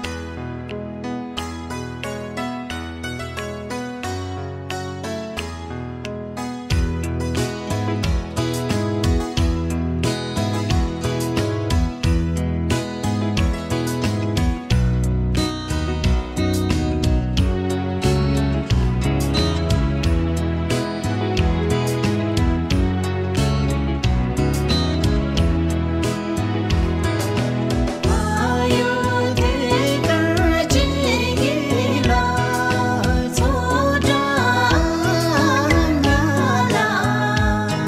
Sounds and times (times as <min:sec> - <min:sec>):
Traditional music: 0:00.0 - 0:37.8.